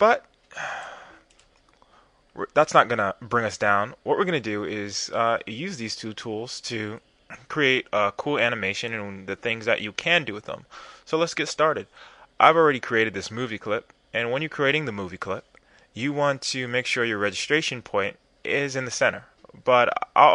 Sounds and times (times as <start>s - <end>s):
Speech: 0.0s - 0.3s, 2.4s - 20.3s.